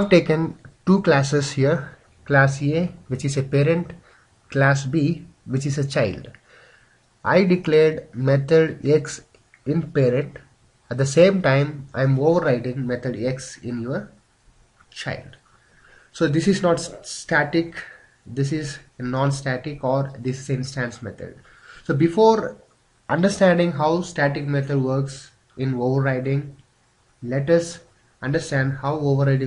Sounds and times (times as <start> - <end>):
Speech: 0.0 - 6.4, 7.2 - 14.2, 14.9 - 15.4, 16.2 - 26.6, 27.2 - 29.4.